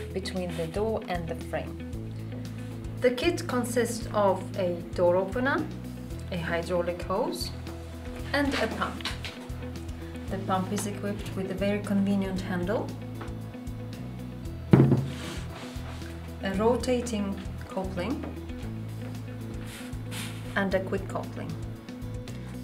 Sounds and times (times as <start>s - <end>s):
Speech: 0.0s - 1.7s, 3.0s - 5.7s, 6.3s - 7.6s, 8.3s - 9.2s, 10.3s - 12.9s, 16.4s - 18.3s, 20.6s - 21.6s
Music: 0.0s - 22.6s.